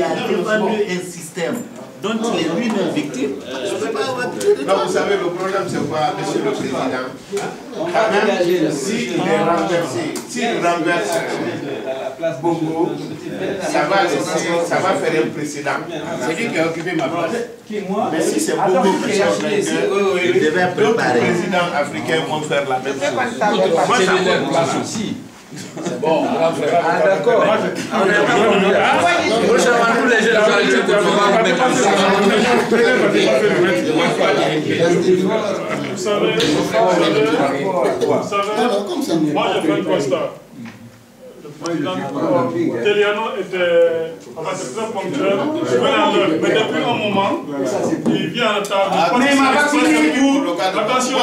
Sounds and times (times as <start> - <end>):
Speech: 0.0 - 51.2.